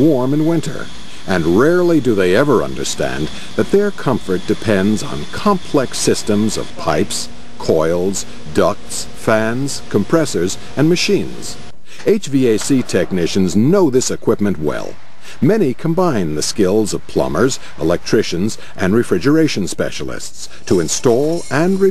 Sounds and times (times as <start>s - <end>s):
Speech: 0.0s - 21.9s.